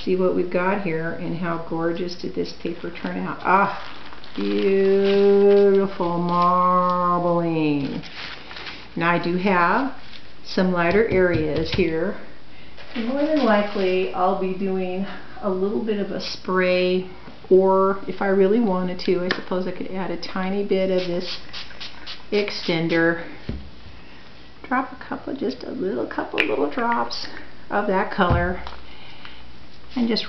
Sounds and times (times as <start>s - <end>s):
Speech: 0.0s - 3.8s, 4.4s - 8.0s, 9.0s - 12.3s, 13.0s - 21.4s, 22.3s - 23.3s, 24.6s - 28.7s, 29.9s - 30.2s.